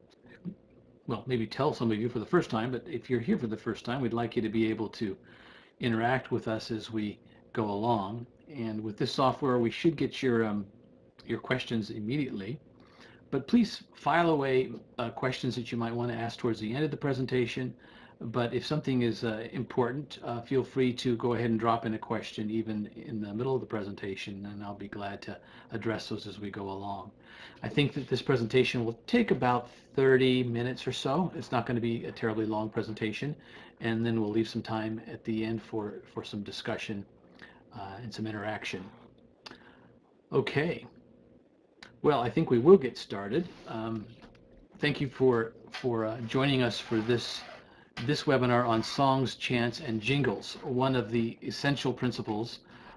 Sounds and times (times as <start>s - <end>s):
Speech: 0.4s - 5.2s, 5.8s - 12.6s, 13.3s - 37.1s, 37.7s - 39.1s, 40.3s - 41.0s, 41.8s - 52.9s.